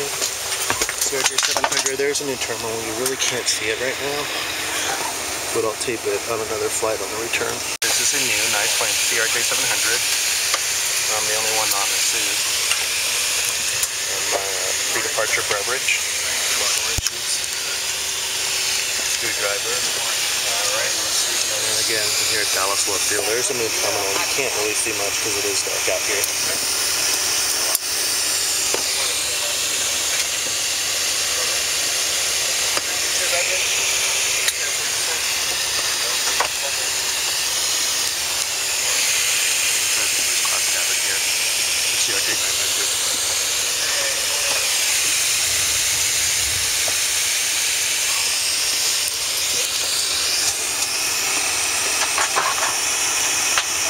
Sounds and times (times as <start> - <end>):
Aircraft: 0.0 - 53.8
Speech: 1.0 - 10.1, 11.0 - 12.5, 14.0 - 17.8, 19.2 - 26.6, 28.8 - 30.2, 31.3 - 31.7, 32.8 - 37.1, 39.9 - 41.3, 41.9 - 45.0, 48.0 - 48.4, 49.5 - 50.0.